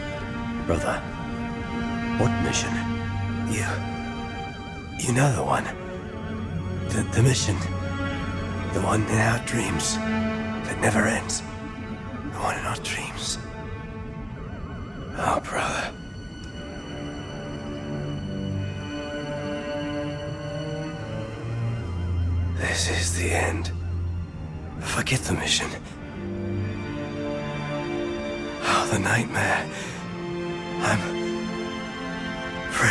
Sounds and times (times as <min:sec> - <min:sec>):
Music: 0:00.0 - 0:32.9
Speech: 0:00.7 - 0:01.0, 0:03.5 - 0:03.8, 0:05.0 - 0:05.8, 0:24.8 - 0:25.9.